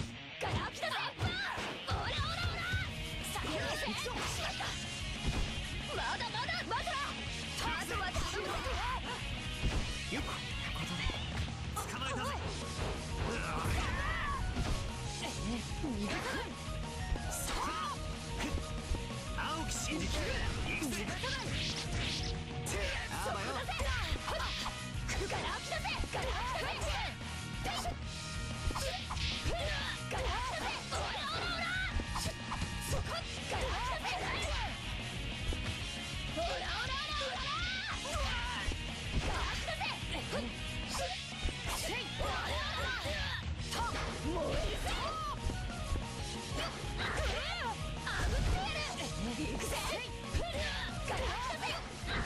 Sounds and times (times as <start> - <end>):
Background music: 0.0 - 52.2
Soundtrack music: 0.0 - 52.2.